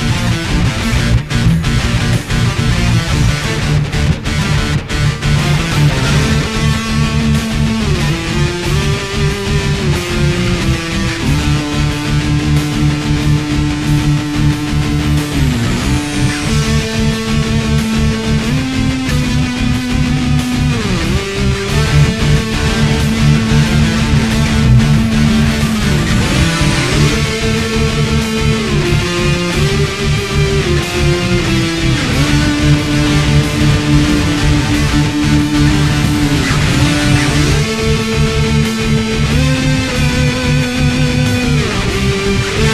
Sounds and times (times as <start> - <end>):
Electric guitar: 0.0 - 42.7
Strum: 0.0 - 42.7.